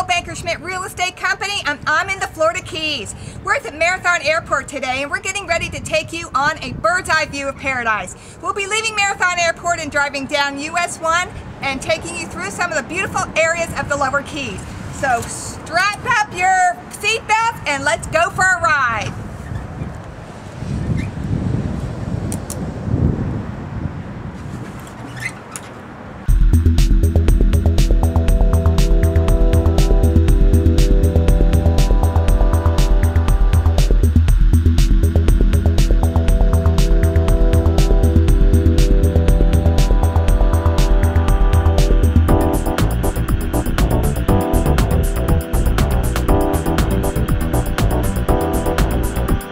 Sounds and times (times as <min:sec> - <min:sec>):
Music: 0:26.3 - 0:49.5.